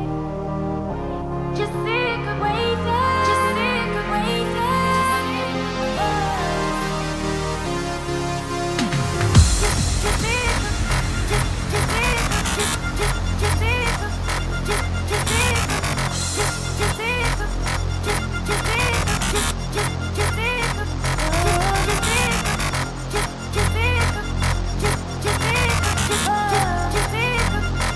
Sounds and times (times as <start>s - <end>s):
Electronic music: 0.0s - 27.9s.